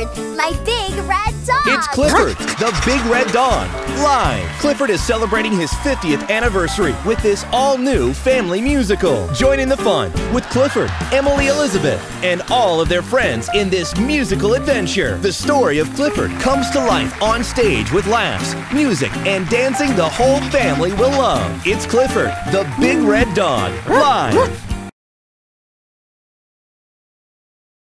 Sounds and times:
Music: 0:00.0 - 0:24.9
Speech: 0:00.4 - 0:24.5.

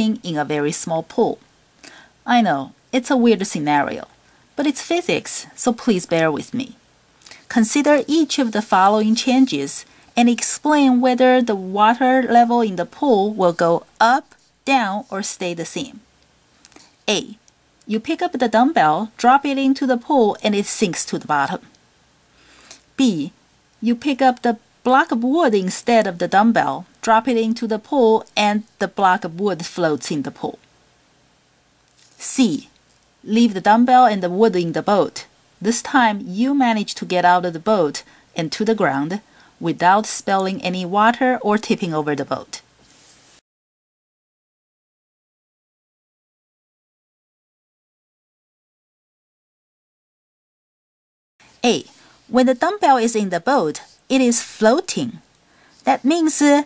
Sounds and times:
Speech: 0:00.0 - 0:01.4, 0:02.2 - 0:06.8, 0:07.5 - 0:16.1, 0:17.1 - 0:21.7, 0:23.0 - 0:30.6, 0:32.2 - 0:42.6, 0:51.6 - 0:55.2, 0:55.8 - 0:56.6.

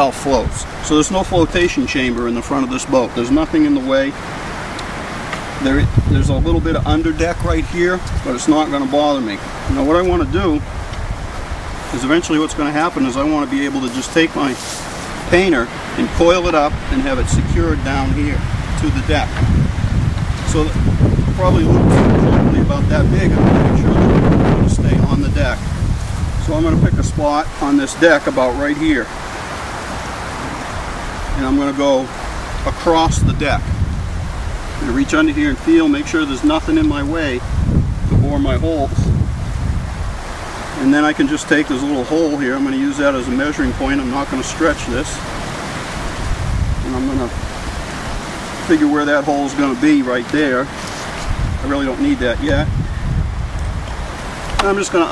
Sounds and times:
Speech: 0:00.0 - 0:04.2, 0:05.6 - 0:10.6, 0:11.9 - 0:14.6, 0:15.3 - 0:19.4, 0:20.5 - 0:20.8, 0:21.4 - 0:25.6, 0:26.4 - 0:29.1, 0:31.4 - 0:32.1, 0:32.7 - 0:33.6, 0:34.8 - 0:37.4, 0:38.2 - 0:39.1, 0:40.8 - 0:45.2, 0:46.8 - 0:47.4, 0:48.7 - 0:50.7, 0:51.6 - 0:52.7, 0:54.6 - 0:55.1
Waves, surf: 0:00.0 - 0:55.1.

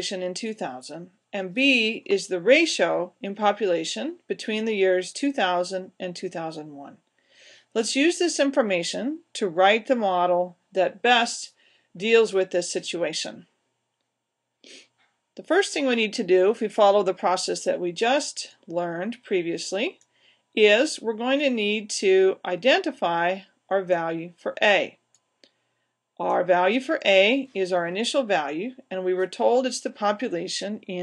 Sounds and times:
Speech: 0:00.0 - 0:07.0, 0:07.8 - 0:13.5, 0:15.4 - 0:20.0, 0:20.6 - 0:25.0, 0:26.2 - 0:31.0.

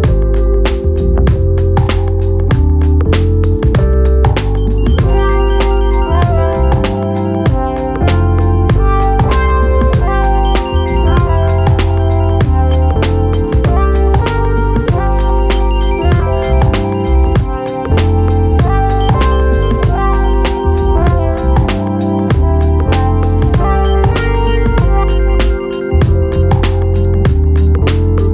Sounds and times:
Music: 0:00.0 - 0:28.3.

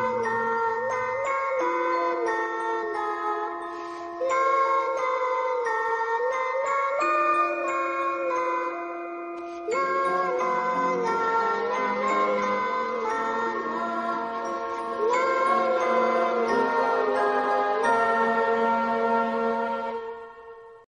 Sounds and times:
Lullaby: 0:00.0 - 0:20.8.

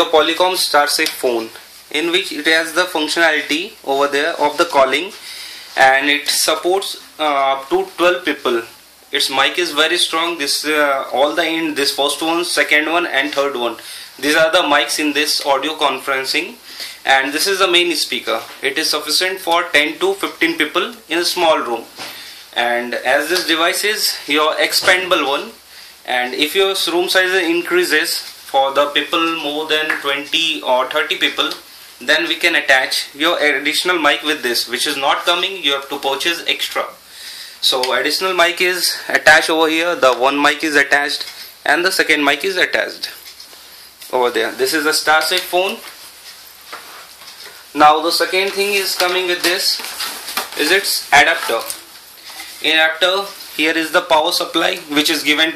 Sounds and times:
Speech: 0:00.0 - 0:05.2, 0:05.8 - 0:37.0, 0:37.6 - 0:43.2, 0:44.0 - 0:45.9, 0:47.7 - 0:49.9, 0:50.5 - 0:51.9, 0:52.6 - 0:55.5.

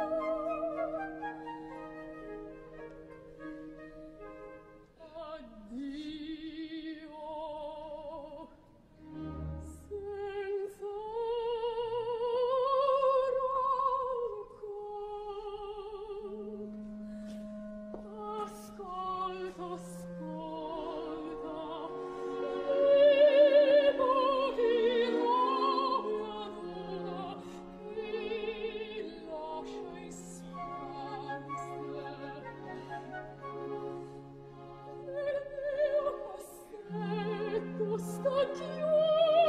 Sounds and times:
Opera: 0:00.0 - 0:39.4.

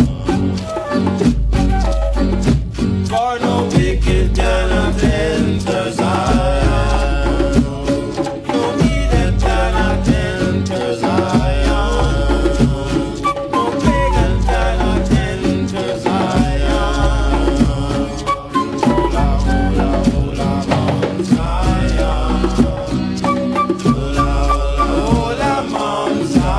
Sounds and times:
Music: 0:00.0 - 0:26.5.

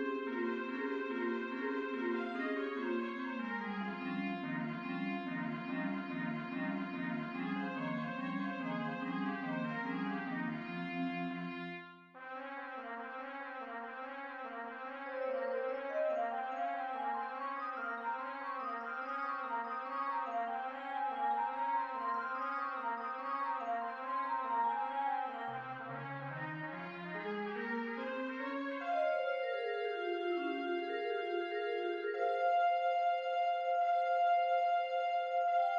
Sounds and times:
Trumpet: 0:12.2 - 0:35.7.

